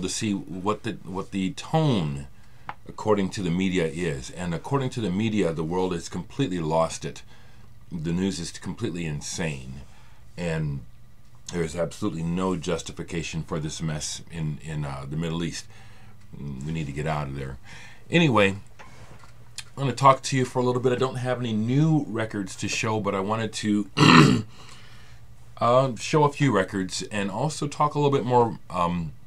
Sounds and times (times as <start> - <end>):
Speech: 0.0 - 2.3, 2.9 - 7.3, 7.9 - 10.9, 11.5 - 15.7, 16.3 - 18.7, 19.6 - 24.1, 25.6 - 29.2.